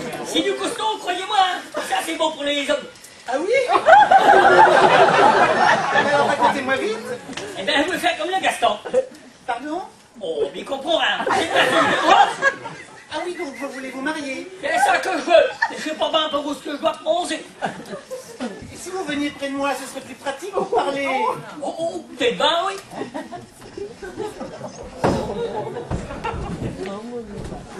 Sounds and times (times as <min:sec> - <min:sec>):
Speech: 0:13.1 - 0:17.5, 0:18.6 - 0:22.9.